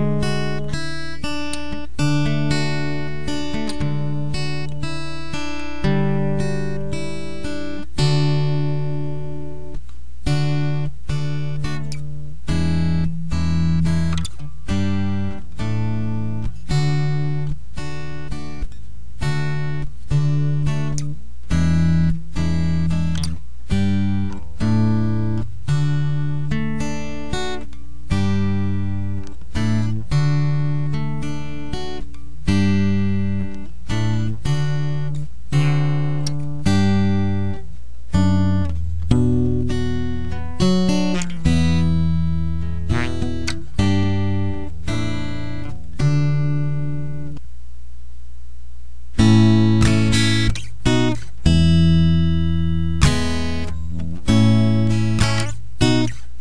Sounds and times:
Strum: 0.0s - 47.4s, 49.2s - 56.4s
Acoustic guitar: 0.0s - 48.3s, 49.0s - 56.4s.

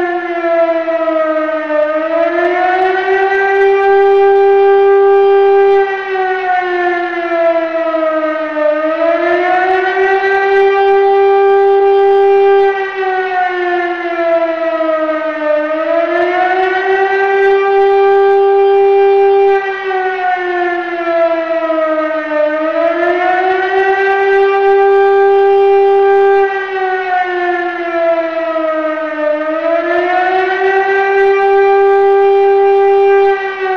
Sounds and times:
Civil defense siren: 0.0s - 33.7s.

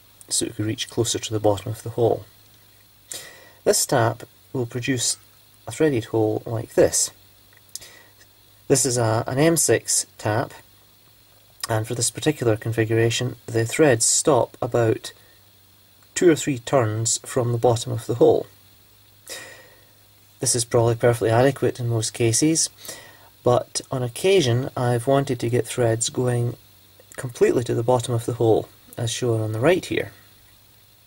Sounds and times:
Speech: 0.3s - 2.3s, 3.7s - 7.2s, 8.7s - 10.6s, 11.6s - 15.2s, 16.2s - 18.5s, 20.4s - 22.7s, 23.4s - 30.2s.

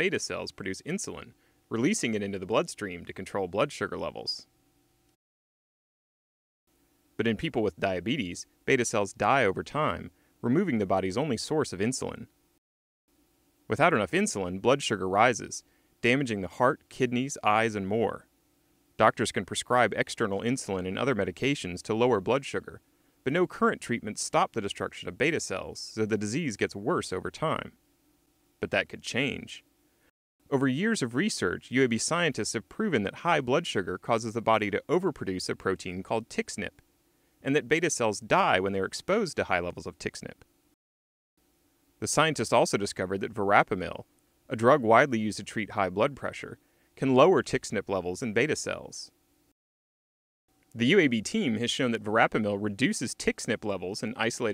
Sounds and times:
Speech: 0.0s - 4.5s, 7.2s - 12.3s, 13.7s - 18.3s, 19.0s - 27.8s, 28.6s - 29.6s, 30.5s - 36.8s, 37.4s - 40.4s, 42.0s - 49.1s, 50.8s - 54.5s.

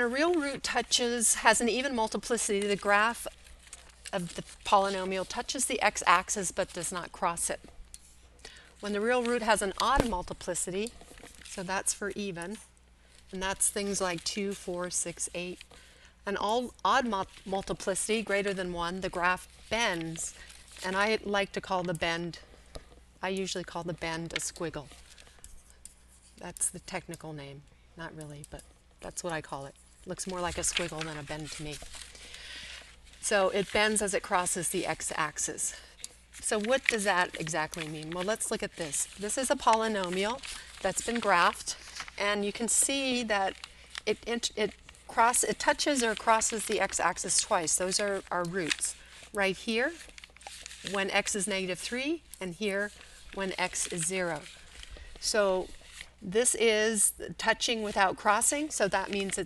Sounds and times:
Narration, monologue: 0.0s - 59.4s.

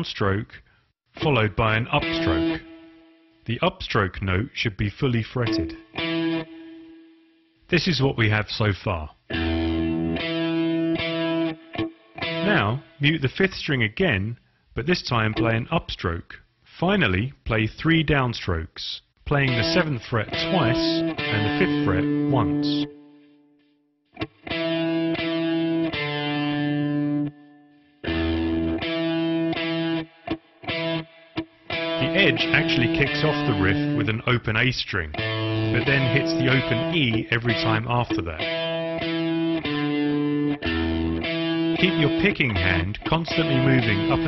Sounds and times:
Speech: 0.0s - 2.6s, 3.5s - 5.8s, 7.7s - 9.2s, 12.4s - 22.9s, 32.0s - 38.5s, 41.8s - 44.2s
Electric guitar: 2.0s - 3.3s, 5.5s - 7.4s, 9.3s - 13.0s, 19.5s - 23.4s, 24.2s - 34.2s, 35.1s - 44.2s.

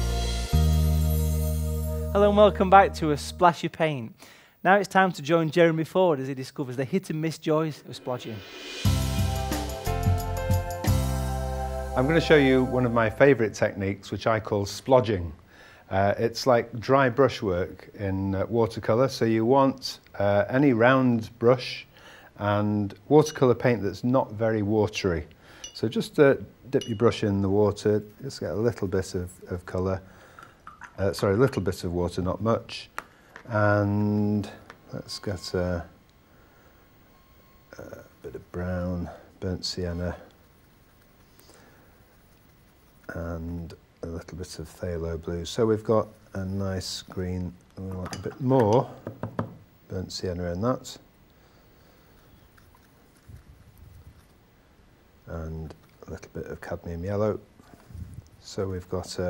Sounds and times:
Speech: 2.2s - 8.5s, 12.0s - 30.0s, 31.0s - 32.9s, 33.5s - 36.0s, 37.8s - 40.3s, 43.1s - 49.0s, 49.9s - 51.1s, 55.3s - 57.5s, 58.4s - 59.3s.

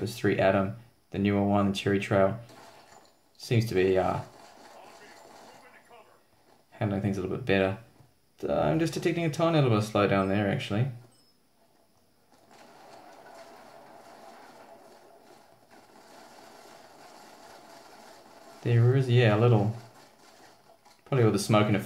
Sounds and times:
Speech: 3.4s - 6.2s, 8.4s - 11.0s, 18.6s - 19.8s, 21.1s - 21.8s.

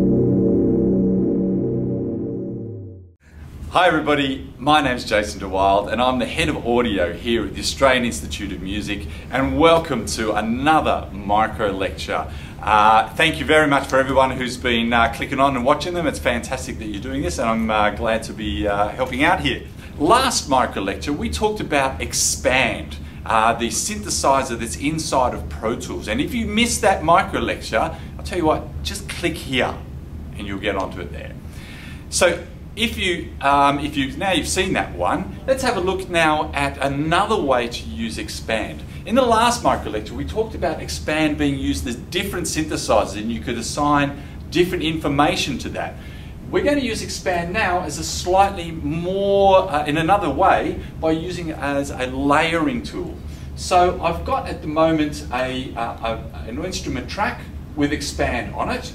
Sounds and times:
Speech: 3.7s - 31.4s, 32.1s - 58.9s.

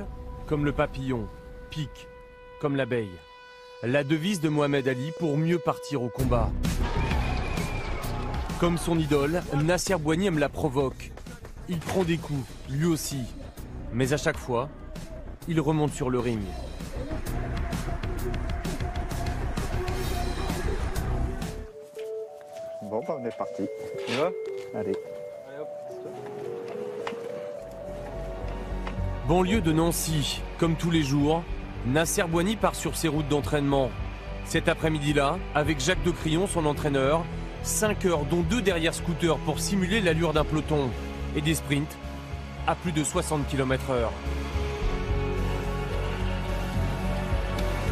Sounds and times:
Music: 0.0s - 47.9s
Speech: 2.6s - 3.2s, 3.8s - 6.5s, 8.6s - 14.7s, 15.4s - 16.6s, 34.5s - 42.0s, 42.7s - 44.2s.

